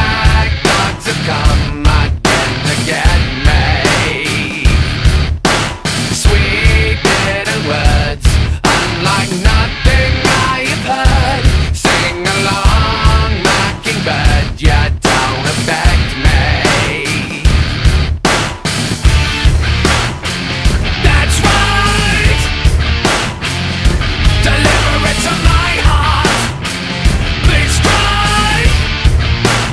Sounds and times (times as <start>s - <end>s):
Music: 0.0s - 29.7s.